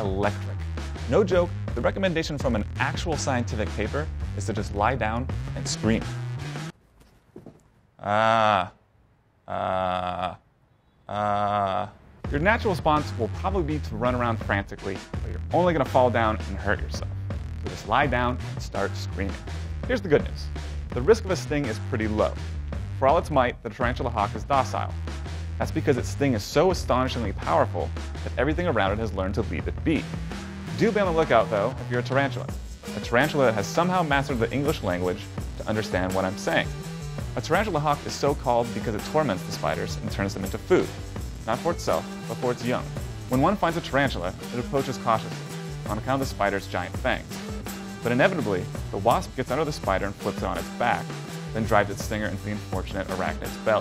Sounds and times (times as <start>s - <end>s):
Speech: 0.0s - 6.1s, 11.1s - 17.1s, 17.7s - 22.4s, 23.0s - 25.0s, 25.6s - 30.1s, 30.7s - 36.8s, 37.4s - 47.3s, 48.0s - 53.8s
Music: 0.0s - 6.8s, 12.2s - 53.8s.